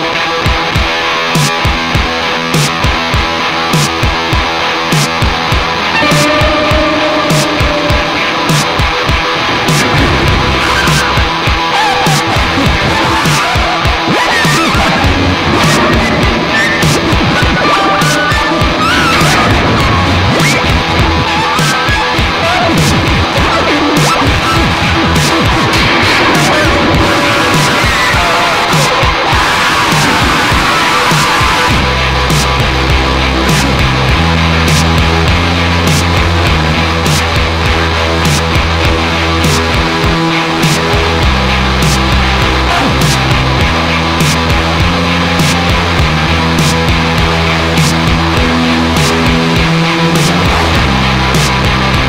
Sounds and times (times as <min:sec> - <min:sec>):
Music: 0:00.0 - 0:52.0.